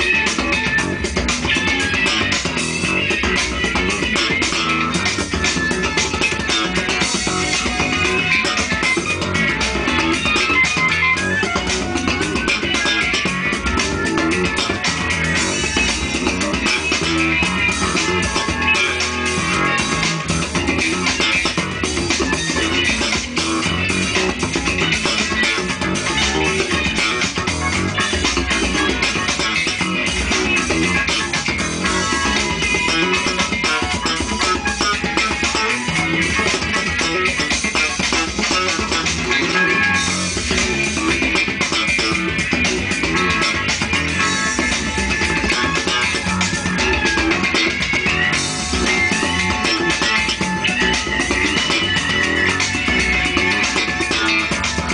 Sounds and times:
Funk: 0.0 - 54.9.

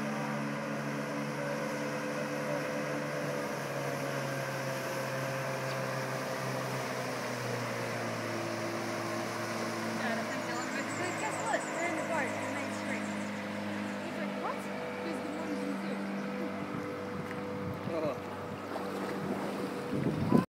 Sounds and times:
Vehicle: 0.0 - 20.4.

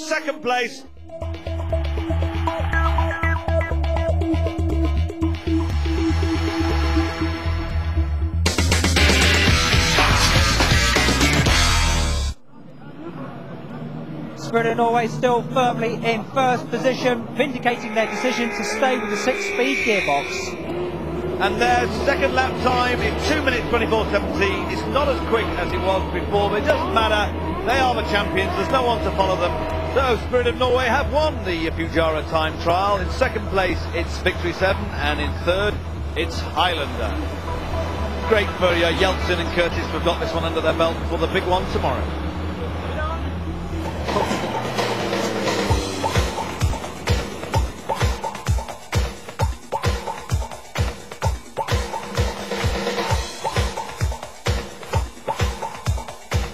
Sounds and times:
Speech: 21.4 - 37.2, 38.3 - 42.0.

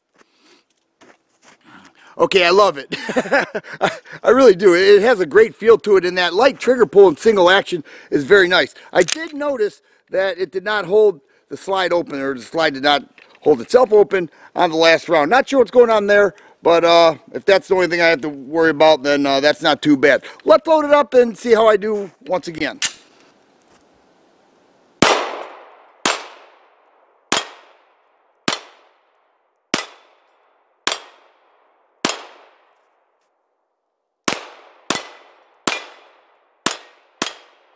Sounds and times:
Gunshot, gunfire: 25.0 - 26.5, 27.3 - 27.8, 28.5 - 28.9, 32.0 - 32.6, 34.3 - 37.7.

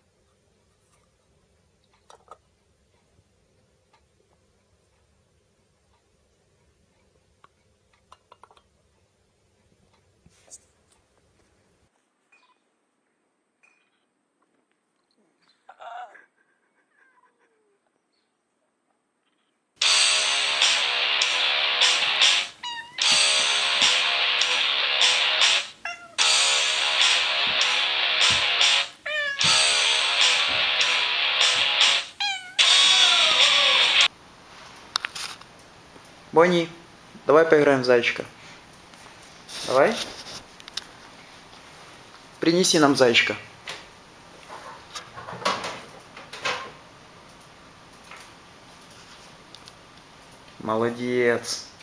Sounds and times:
Music: 19.8 - 34.1.

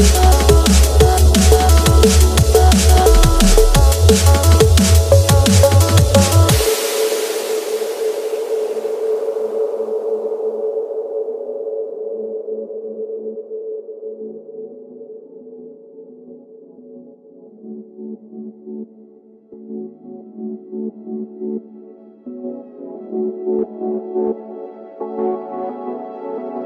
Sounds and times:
Drum and bass: 0.0 - 10.3.

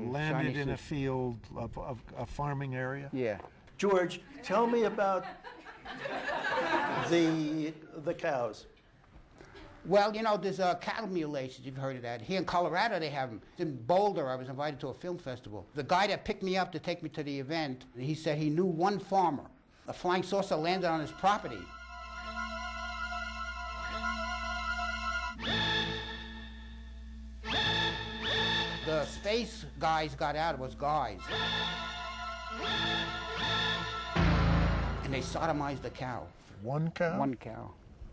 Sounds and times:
Speech: 0.0 - 5.3, 7.0 - 8.7, 9.9 - 21.7, 35.0 - 37.8
Music: 20.6 - 36.3.

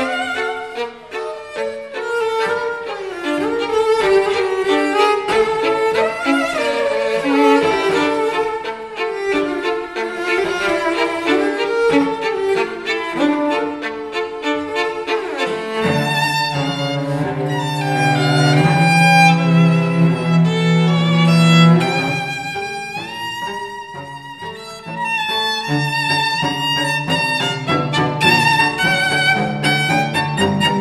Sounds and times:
Violin, fiddle: 0.0 - 30.8.

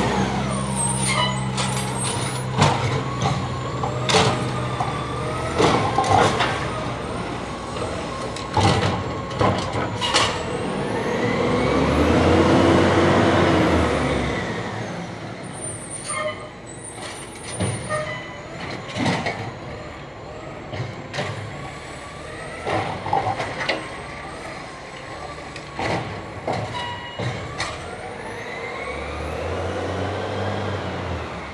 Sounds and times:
Truck: 0.0 - 31.5.

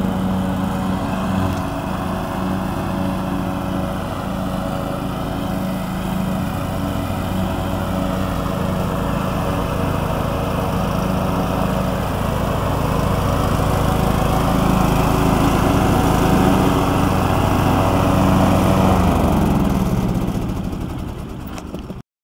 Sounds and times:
Lawn mower: 0.0 - 22.0
Vehicle: 0.0 - 22.0.

